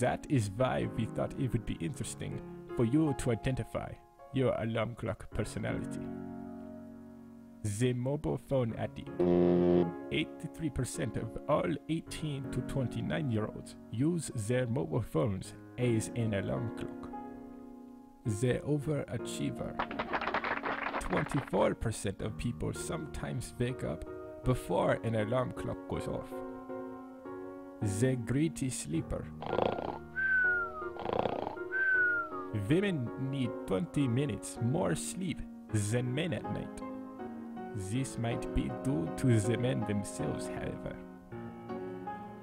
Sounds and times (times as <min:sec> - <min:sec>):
Speech: 0:00.0 - 0:06.0, 0:07.6 - 0:09.1, 0:10.1 - 0:17.1, 0:18.3 - 0:19.8, 0:21.0 - 0:26.4, 0:27.8 - 0:29.3, 0:32.6 - 0:36.8, 0:37.7 - 0:41.0
Music: 0:00.0 - 0:42.4.